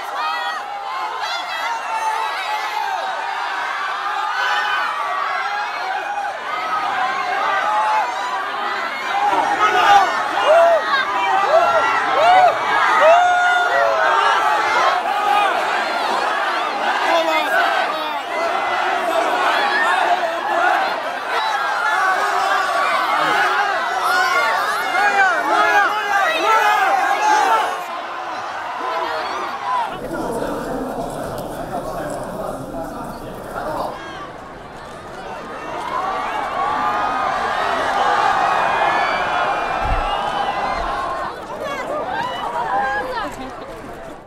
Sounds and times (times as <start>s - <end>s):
Crowd: 0.0s - 44.2s.